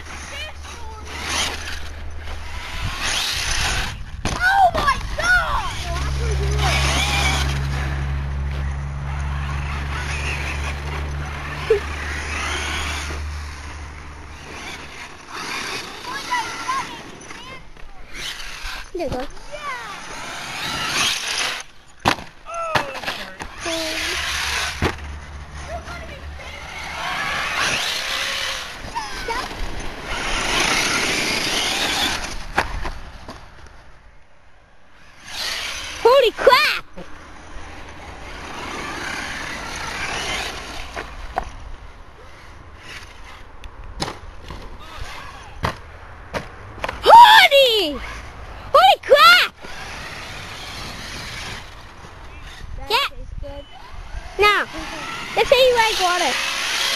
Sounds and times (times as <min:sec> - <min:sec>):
Vehicle: 0:00.0 - 0:56.9.